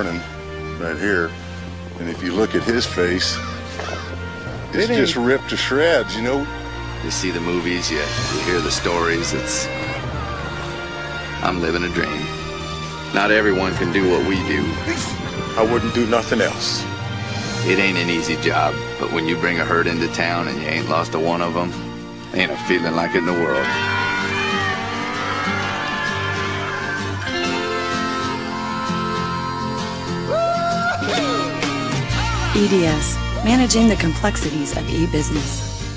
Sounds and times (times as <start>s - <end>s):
Music: 0.0s - 35.9s
Speech: 4.7s - 6.4s, 15.6s - 16.8s, 17.7s - 23.7s.